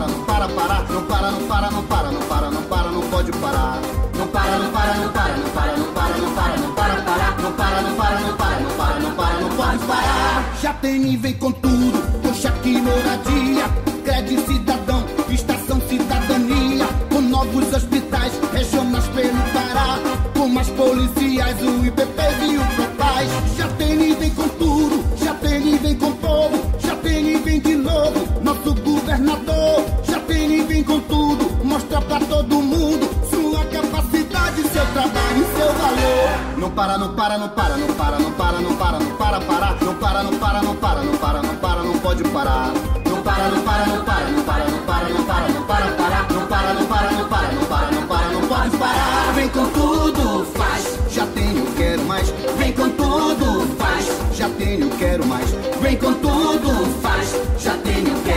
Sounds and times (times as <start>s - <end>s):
Jingle (music): 0.0s - 58.3s.